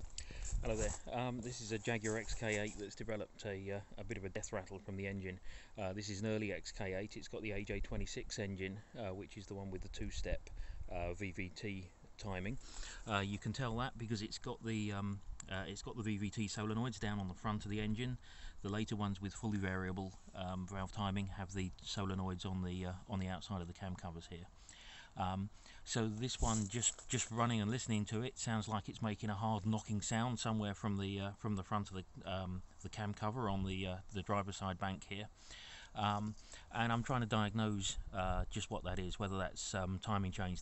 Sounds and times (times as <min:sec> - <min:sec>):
Speech: 0:00.4 - 0:24.6, 0:25.2 - 0:40.6.